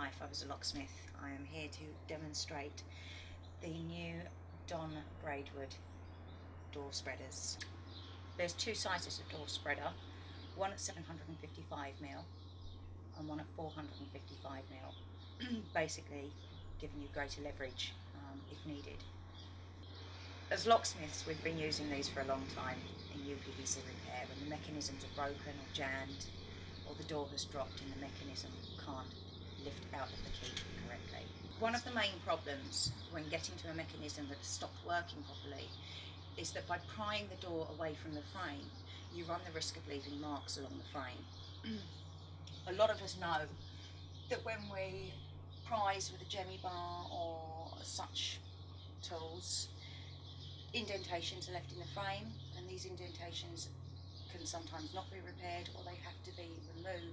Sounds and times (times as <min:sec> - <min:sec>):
Speech: 0:00.0 - 0:03.0, 0:03.6 - 0:05.8, 0:06.7 - 0:07.7, 0:08.4 - 0:10.0, 0:10.6 - 0:12.3, 0:13.2 - 0:19.1, 0:20.5 - 0:41.9, 0:42.5 - 0:43.6, 0:44.3 - 0:48.4, 0:49.0 - 0:49.8, 0:50.8 - 0:53.7, 0:54.3 - 0:57.1.